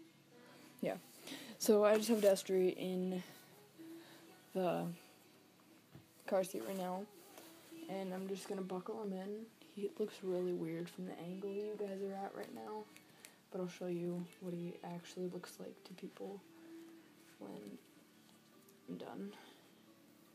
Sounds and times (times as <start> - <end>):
Music: 0.0 - 20.3
Speech: 1.6 - 3.3, 4.6 - 5.0, 6.3 - 7.1, 7.9 - 12.9, 13.5 - 16.4, 17.4 - 17.8, 18.9 - 19.5.